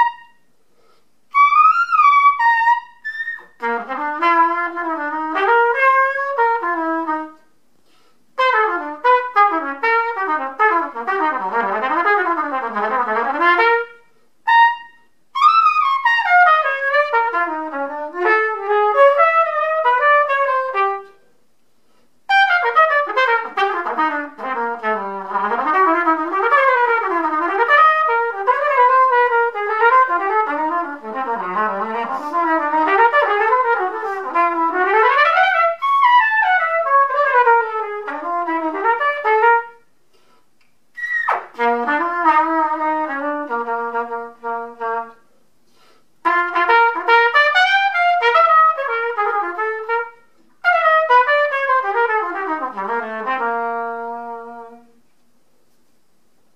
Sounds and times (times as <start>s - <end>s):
Trumpet: 0.0s - 0.5s, 1.3s - 21.4s, 22.3s - 55.2s.